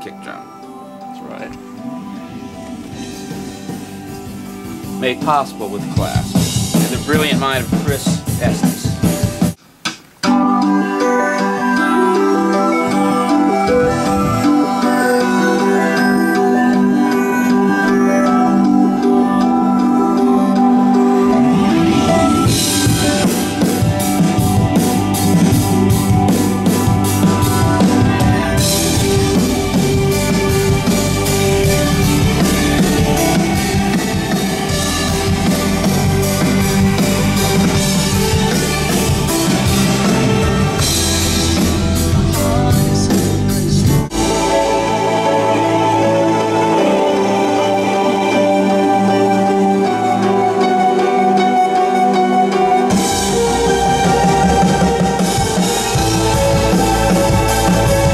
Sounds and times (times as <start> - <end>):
Speech: 0.0 - 0.5, 5.0 - 9.0
Music: 0.0 - 58.1.